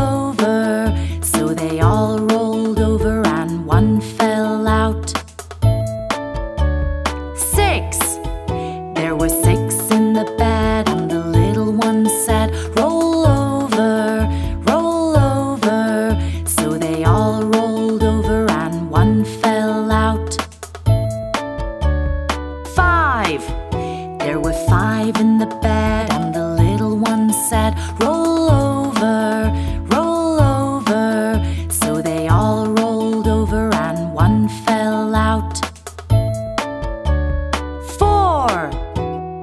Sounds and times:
Music for children: 0.0s - 39.4s.

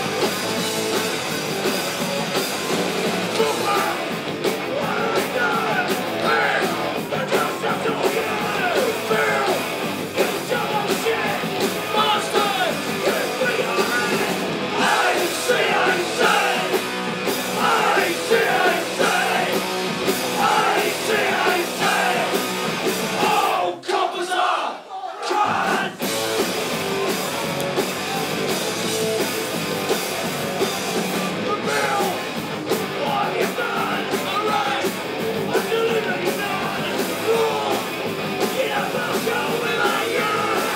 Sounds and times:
Music: 0.0s - 23.6s, 25.3s - 40.7s
Inside, large room or hall: 0.0s - 40.7s
Singing: 3.3s - 16.8s, 17.5s - 19.6s, 20.3s - 22.4s, 23.1s - 26.0s, 31.3s - 40.7s.

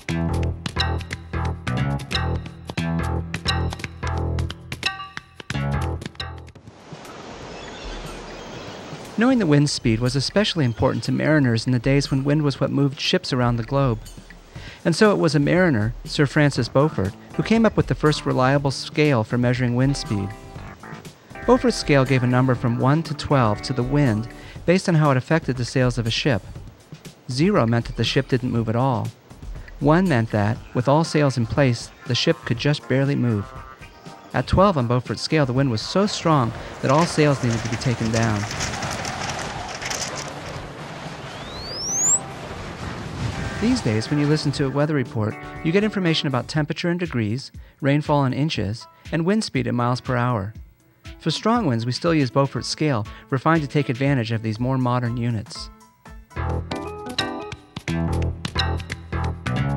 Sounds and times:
Music: 0.0s - 6.7s, 9.0s - 38.3s, 43.4s - 59.7s
Speech: 9.2s - 14.1s, 14.8s - 20.4s, 21.4s - 26.6s, 27.3s - 29.1s, 29.8s - 33.6s, 34.3s - 38.5s, 43.6s - 50.6s, 51.2s - 55.7s.

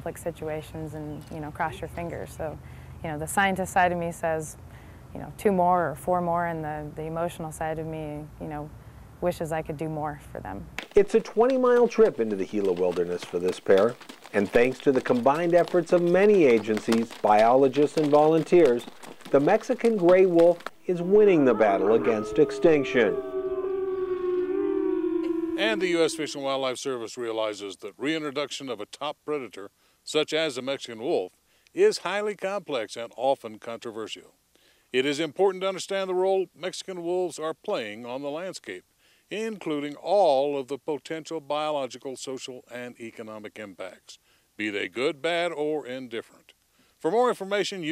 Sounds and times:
Speech: 0.0s - 4.6s, 5.2s - 23.2s, 25.6s - 34.3s, 35.0s - 47.9s
Wild animals: 11.8s - 26.6s.

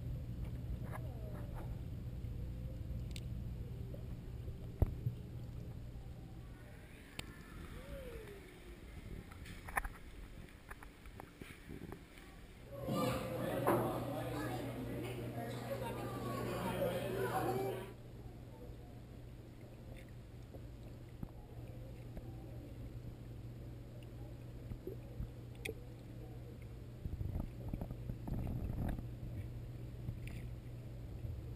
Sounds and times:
Speech: 12.2s - 19.2s.

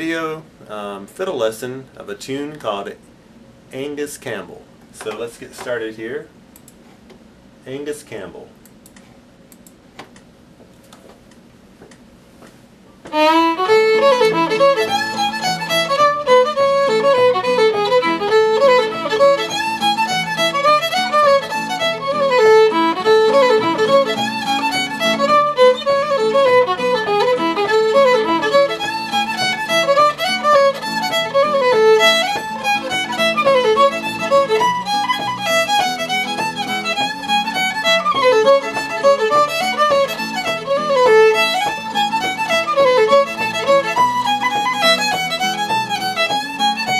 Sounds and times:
Violin, fiddle: 13.1s - 47.0s.

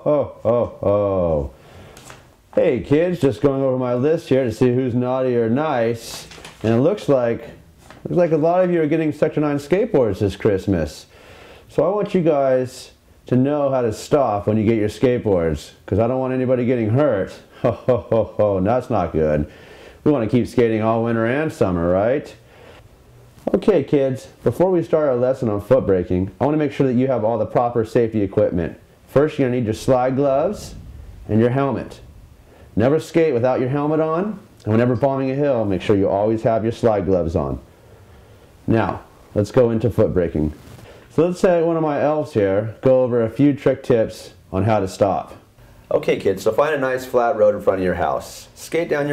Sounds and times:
Speech: 0.0s - 1.6s, 2.5s - 11.1s, 11.7s - 22.4s, 23.4s - 32.0s, 32.8s - 37.7s, 38.7s - 49.1s.

